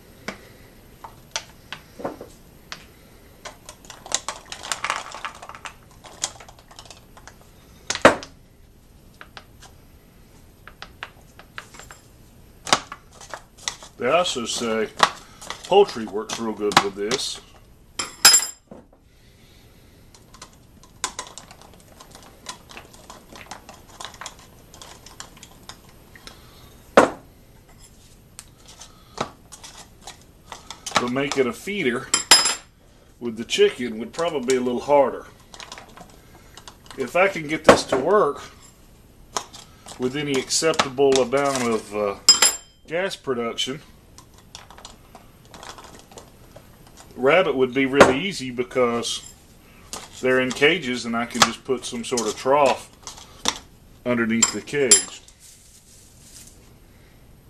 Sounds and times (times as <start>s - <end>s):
Speech: 14.0s - 15.0s, 15.7s - 17.5s, 31.0s - 32.1s, 33.2s - 35.3s, 37.0s - 38.6s, 40.0s - 42.3s, 42.9s - 43.9s, 47.2s - 49.3s, 50.2s - 52.9s, 54.0s - 55.3s.